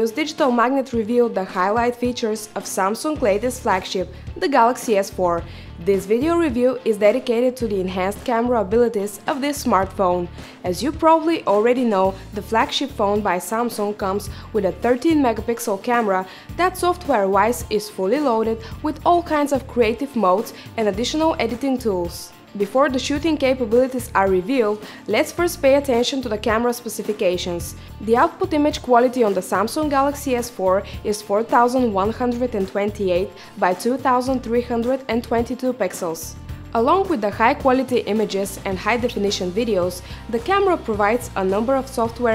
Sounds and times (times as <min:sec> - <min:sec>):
Music: 0:00.0 - 0:42.3
Speech: 0:00.0 - 0:42.3.